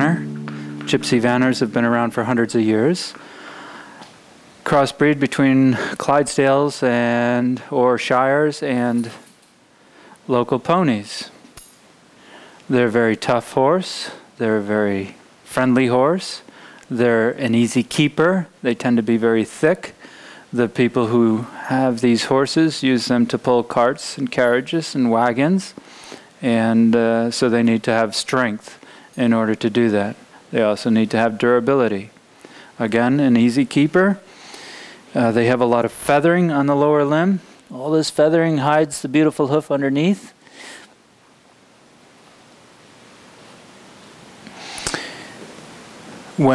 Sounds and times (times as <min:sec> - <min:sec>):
Speech: 0:00.0 - 0:03.2, 0:04.6 - 0:09.2, 0:10.3 - 0:11.4, 0:12.7 - 0:25.8, 0:26.4 - 0:32.2, 0:32.8 - 0:34.2, 0:35.1 - 0:40.4.